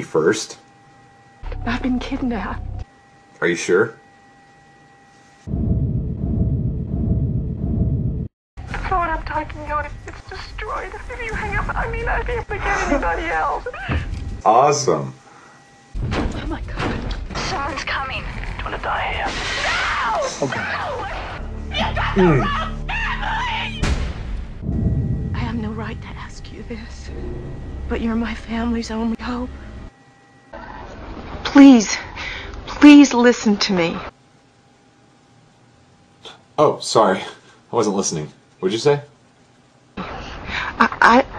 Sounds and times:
Music: 0:01.4 - 0:02.9, 0:20.5 - 0:29.6.

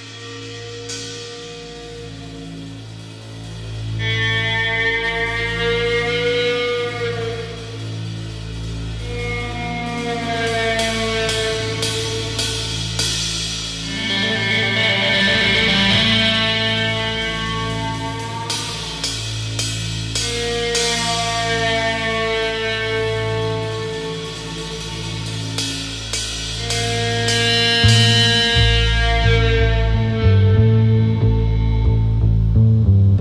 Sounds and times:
Music: 0:00.0 - 0:33.2.

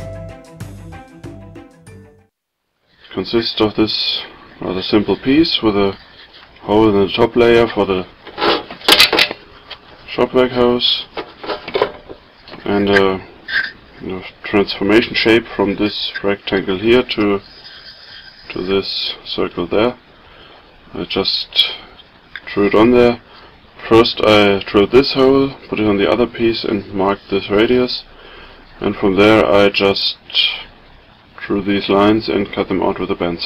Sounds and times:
Speech: 0:03.1 - 0:06.0, 0:06.6 - 0:08.2, 0:10.1 - 0:11.2, 0:12.6 - 0:13.3, 0:14.0 - 0:17.5, 0:18.5 - 0:20.0, 0:20.9 - 0:23.2, 0:23.8 - 0:28.1, 0:28.8 - 0:30.8, 0:31.4 - 0:33.4.

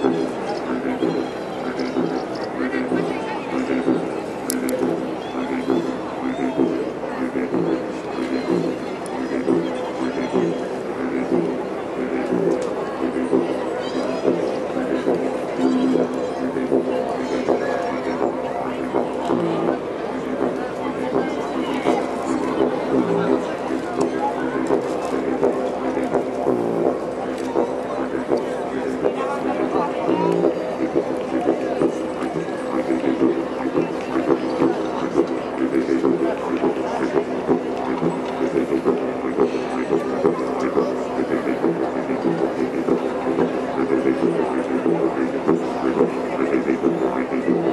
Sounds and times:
Didgeridoo: 0:00.0 - 0:47.7.

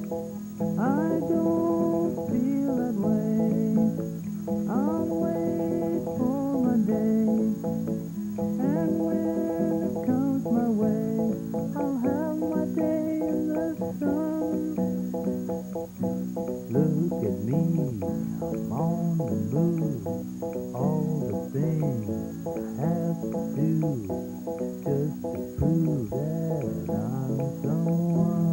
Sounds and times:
Music: 0:00.0 - 0:28.5.

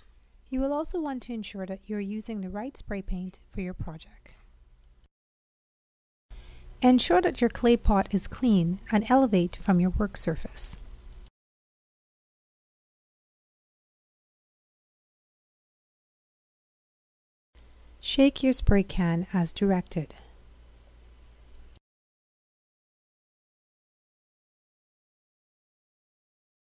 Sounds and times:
Speech: 0:00.5 - 0:04.3, 0:06.8 - 0:10.8, 0:18.0 - 0:20.3.

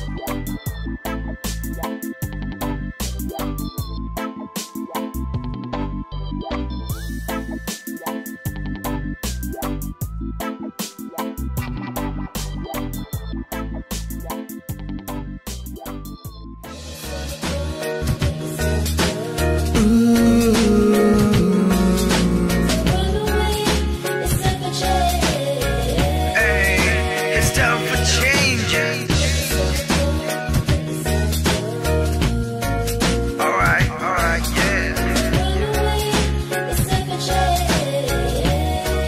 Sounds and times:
Jazz: 0:00.0 - 0:39.0.

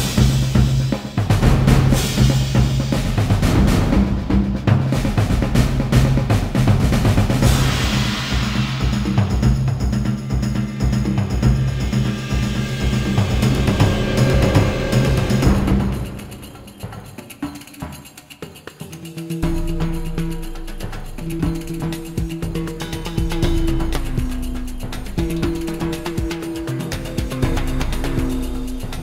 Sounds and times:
Music: 0:00.0 - 0:29.0.

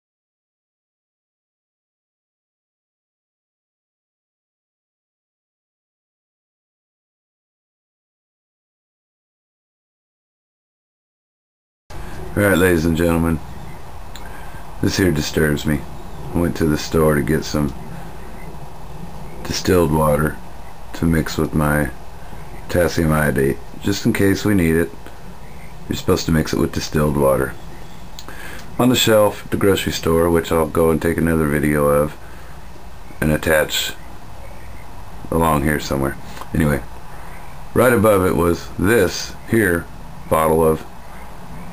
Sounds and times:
Speech: 0:12.3 - 0:13.4, 0:14.8 - 0:17.8, 0:19.4 - 0:20.4, 0:21.0 - 0:22.0, 0:22.7 - 0:25.0, 0:25.9 - 0:27.6, 0:28.8 - 0:32.2, 0:33.2 - 0:34.0, 0:35.3 - 0:36.9, 0:37.8 - 0:40.9.

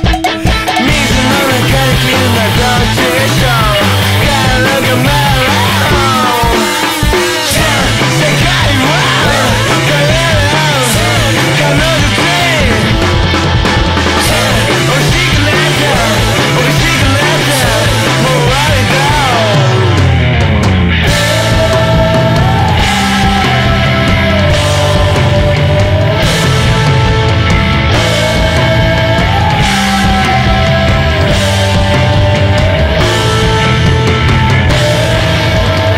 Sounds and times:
Rock music: 0:00.0 - 0:35.9.

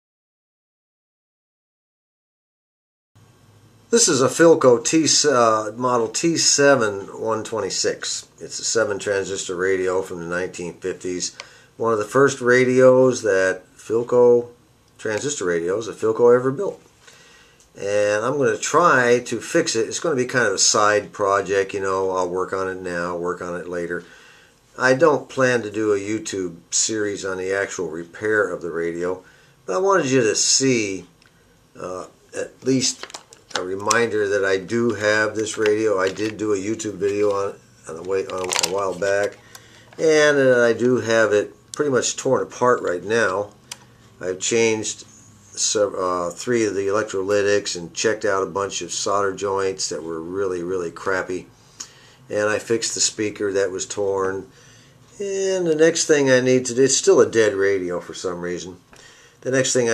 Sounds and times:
Speech: 0:03.9 - 0:16.8, 0:17.8 - 0:24.1, 0:24.8 - 0:31.1, 0:31.8 - 0:39.4, 0:40.0 - 0:43.6, 0:44.2 - 0:51.5, 0:52.3 - 0:54.5, 0:55.2 - 0:59.9.

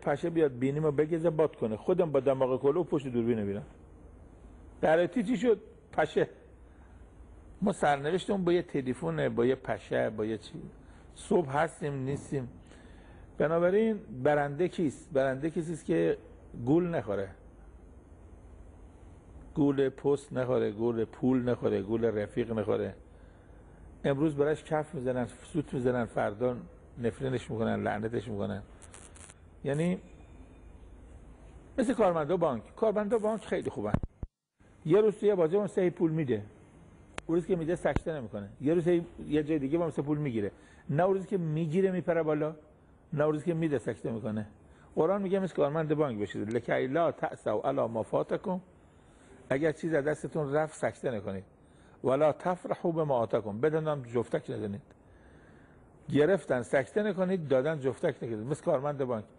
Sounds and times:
Speech: 0:00.0 - 0:03.8, 0:04.8 - 0:06.5, 0:07.6 - 0:12.6, 0:13.4 - 0:17.4, 0:19.6 - 0:23.0, 0:24.0 - 0:28.7, 0:29.6 - 0:30.1, 0:31.8 - 0:34.1, 0:34.8 - 0:36.5, 0:37.3 - 0:48.7, 0:49.5 - 0:54.9, 0:56.1 - 0:59.3.

